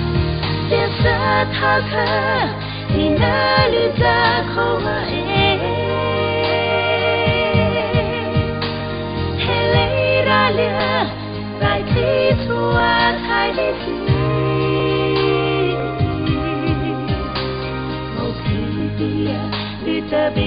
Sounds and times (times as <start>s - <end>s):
Singing: 0.6s - 20.4s.